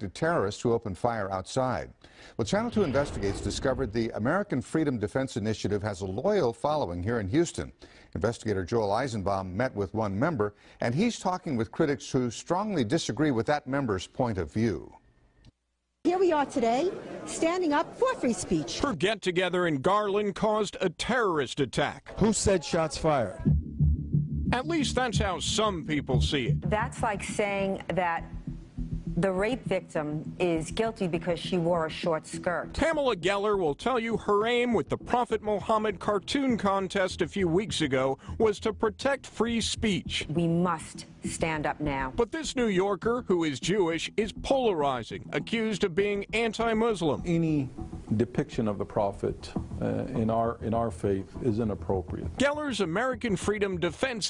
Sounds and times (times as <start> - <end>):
Male speech, man speaking: 0.0 - 15.0, 18.7 - 23.5, 24.6 - 26.7, 32.7 - 40.3, 42.2 - 54.3
Female speech, woman speaking: 16.1 - 18.8, 22.2 - 23.5, 26.7 - 28.3, 29.2 - 32.7, 40.3 - 42.2
Music: 22.9 - 54.3.